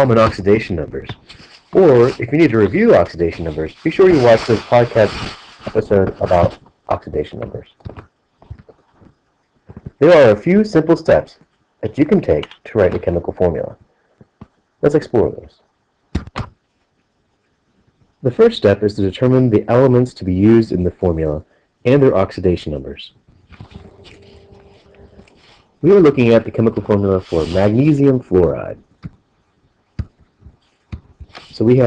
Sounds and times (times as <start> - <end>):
Speech: 0.0 - 8.0, 10.0 - 13.8, 14.8 - 15.6, 18.2 - 28.8, 31.4 - 31.8.